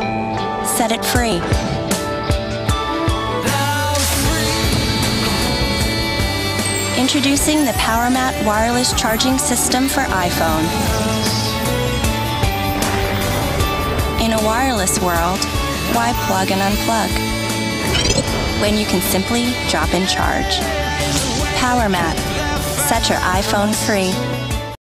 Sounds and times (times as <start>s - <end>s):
Music: 0.0s - 24.8s
Speech: 0.7s - 1.6s, 7.0s - 11.1s, 14.2s - 17.2s, 18.6s - 20.7s, 21.4s - 24.2s.